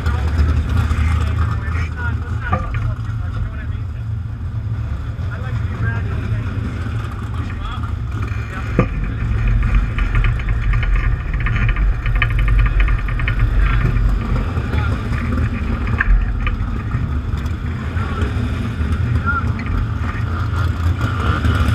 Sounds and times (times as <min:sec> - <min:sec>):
Speech: 0:00.0 - 0:04.2, 0:05.3 - 0:09.4, 0:14.6 - 0:15.2, 0:19.0 - 0:20.3
Vehicle: 0:00.0 - 0:21.7.